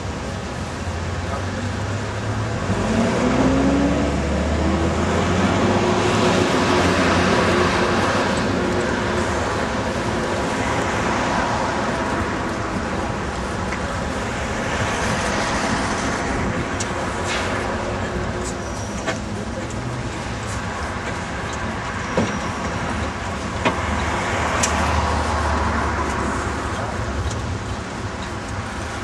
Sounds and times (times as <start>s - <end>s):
Car: 0.0s - 29.0s
Engine: 0.0s - 29.0s
Traffic noise, roadway noise: 0.0s - 29.0s.